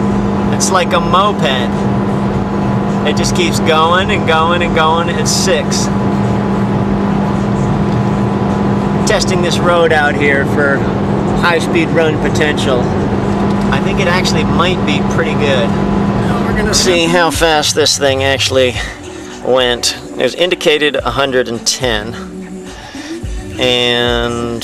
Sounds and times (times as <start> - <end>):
Car: 0.0 - 24.6
Speech: 0.5 - 1.7, 3.1 - 5.9, 9.1 - 12.9, 13.7 - 18.9, 19.5 - 22.2, 23.6 - 24.6.